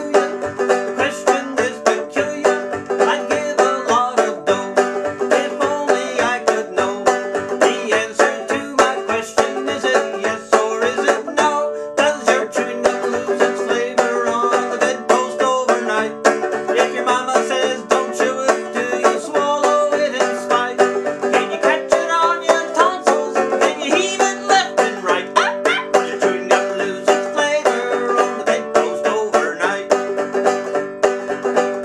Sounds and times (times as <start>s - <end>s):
Music: 0.0s - 31.8s.